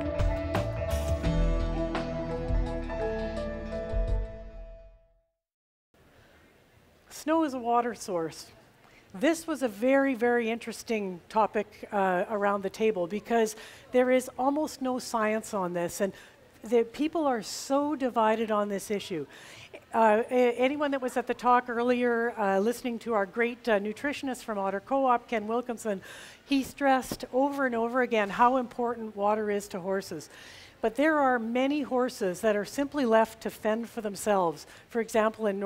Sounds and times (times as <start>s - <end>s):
Speech: 7.1s - 8.6s, 9.2s - 35.6s.